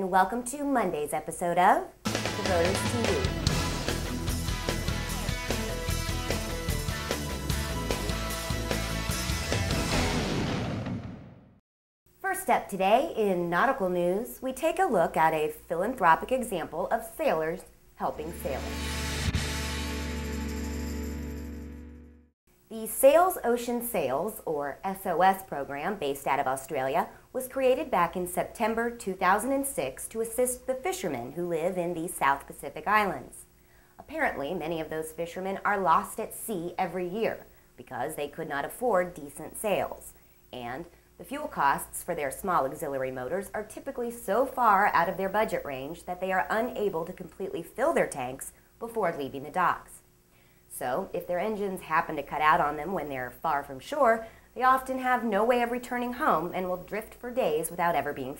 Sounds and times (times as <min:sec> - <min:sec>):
Speech: 0:00.0 - 0:03.5, 0:12.2 - 0:18.8, 0:22.7 - 0:50.0, 0:50.7 - 0:58.3.